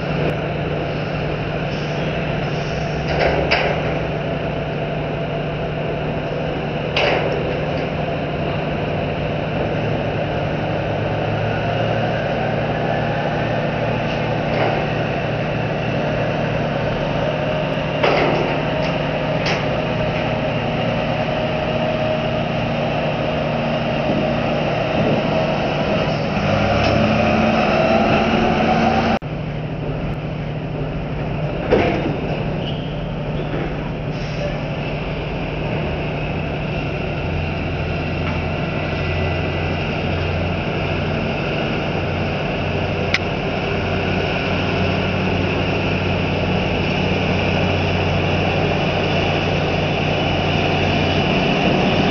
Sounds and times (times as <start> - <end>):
Vehicle: 0.0 - 52.1.